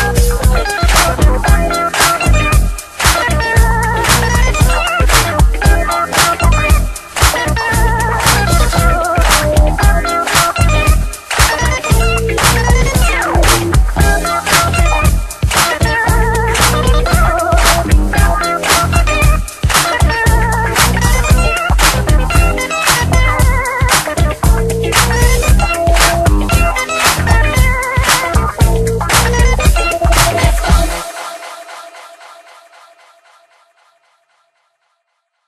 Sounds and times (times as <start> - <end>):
Funk: 0.0 - 31.2.